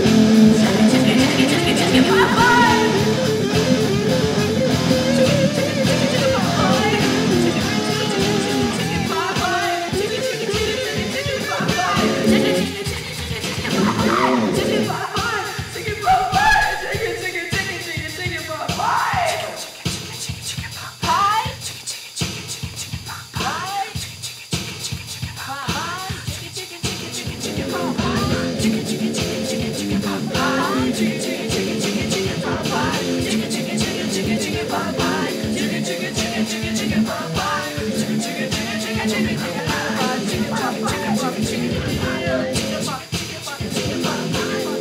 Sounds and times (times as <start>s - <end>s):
Music: 0.0s - 44.8s.